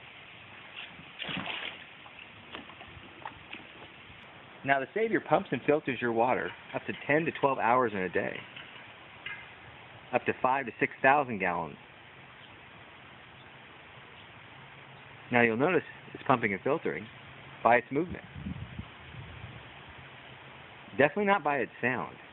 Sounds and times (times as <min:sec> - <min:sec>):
Speech: 0:04.6 - 0:08.5, 0:10.1 - 0:11.8, 0:15.3 - 0:18.3, 0:20.9 - 0:22.2.